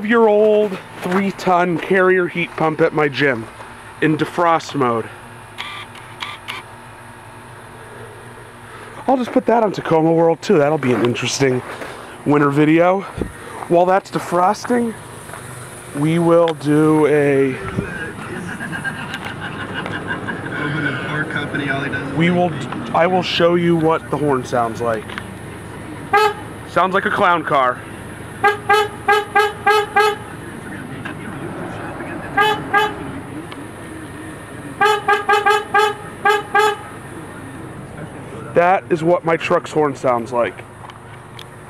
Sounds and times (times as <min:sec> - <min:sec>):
Speech: 0:00.0 - 0:05.2, 0:09.0 - 0:15.0, 0:15.9 - 0:18.5, 0:20.6 - 0:25.0, 0:26.7 - 0:27.8, 0:30.4 - 0:34.8, 0:37.1 - 0:40.6
Toot: 0:26.1 - 0:26.4, 0:32.4 - 0:33.1, 0:34.8 - 0:36.9.